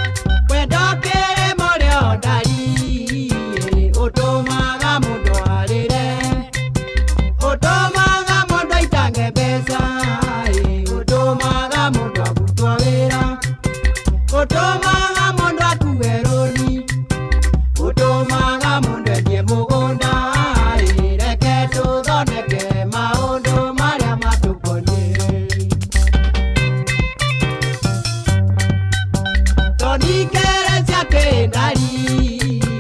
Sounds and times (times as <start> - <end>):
Music: 0.0 - 32.8.